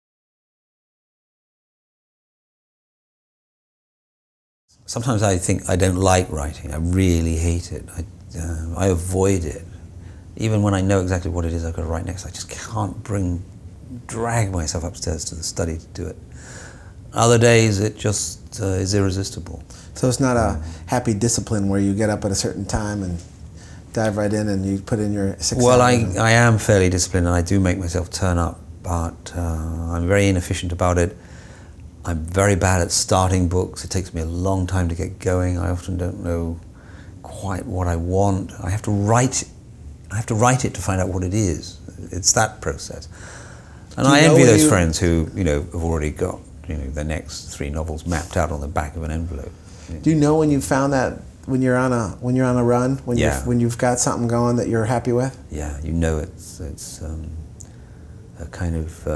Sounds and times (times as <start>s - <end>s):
Speech: 4.9s - 9.7s, 10.4s - 16.2s, 17.2s - 23.3s, 23.9s - 31.2s, 32.0s - 36.6s, 37.2s - 43.1s, 44.0s - 57.4s, 58.4s - 59.1s.